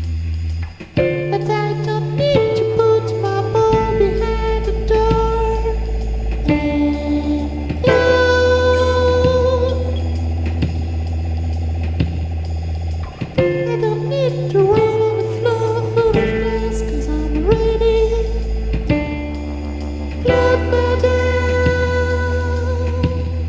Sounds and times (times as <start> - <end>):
Funny music: 0.0 - 23.4.